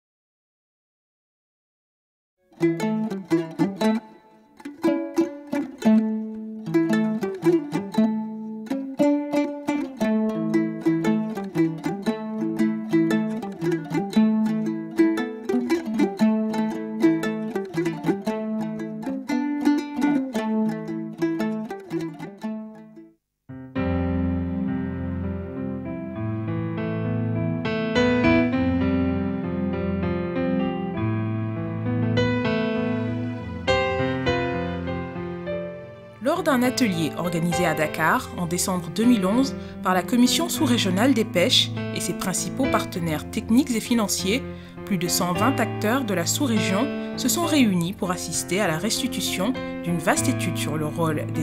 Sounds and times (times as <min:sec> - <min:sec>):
Music: 0:02.4 - 0:51.4
Speech: 0:36.2 - 0:51.4.